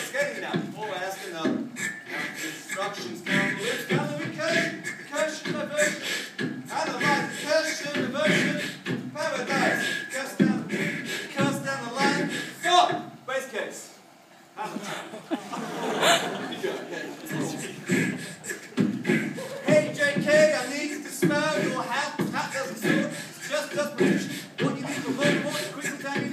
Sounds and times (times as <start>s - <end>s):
Beatboxing: 0.0s - 13.1s, 17.2s - 26.3s.